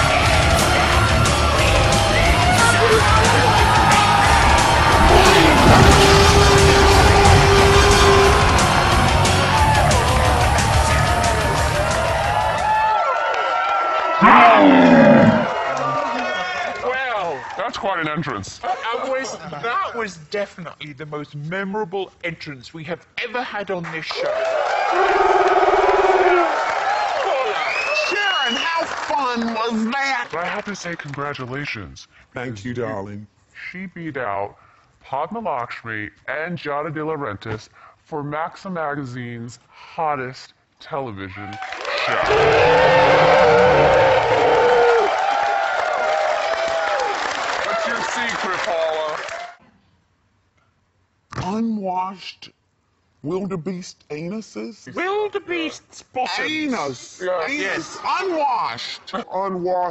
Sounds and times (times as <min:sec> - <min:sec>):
Music: 0:00.0 - 0:12.9
Speech: 0:16.4 - 0:24.3, 0:28.0 - 0:42.3, 0:47.7 - 0:49.2, 0:51.4 - 0:52.6, 0:53.2 - 0:59.9.